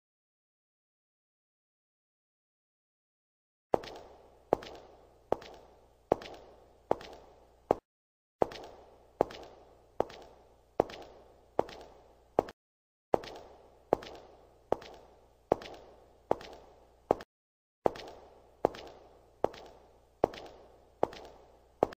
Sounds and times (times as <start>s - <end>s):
Walk, footsteps: 3.8s - 7.8s, 8.4s - 12.6s, 13.2s - 17.3s, 17.9s - 21.9s.